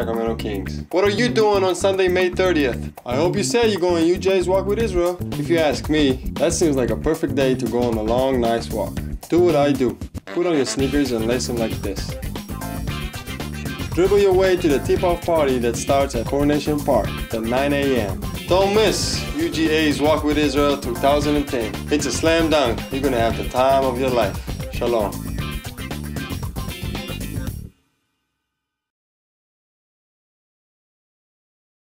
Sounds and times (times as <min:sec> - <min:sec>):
Speech: 0:00.0 - 0:12.1, 0:14.0 - 0:25.2
Music: 0:00.0 - 0:28.5.